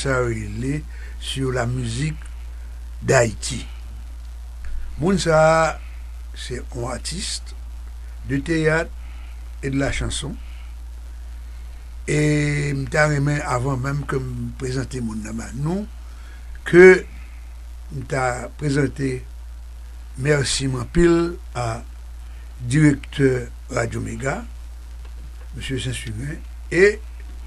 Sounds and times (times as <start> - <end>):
Speech: 0.0 - 2.3, 3.0 - 3.8, 5.0 - 7.5, 8.2 - 8.9, 9.6 - 10.4, 12.1 - 15.9, 16.6 - 17.1, 17.9 - 19.2, 20.2 - 21.9, 22.6 - 24.5, 25.5 - 27.0.